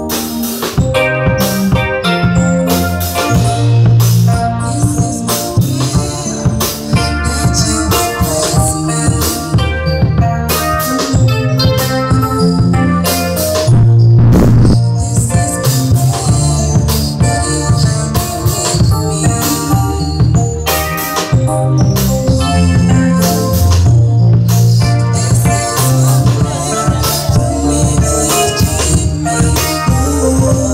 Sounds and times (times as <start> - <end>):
Gospel music: 0.0 - 30.7.